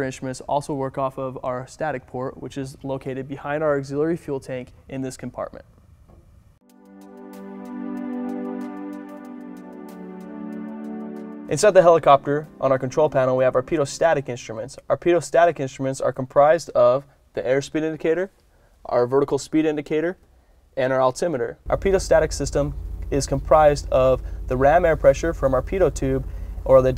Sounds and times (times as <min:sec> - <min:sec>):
Speech: 0:00.0 - 0:05.7, 0:11.5 - 0:20.2, 0:20.8 - 0:26.9.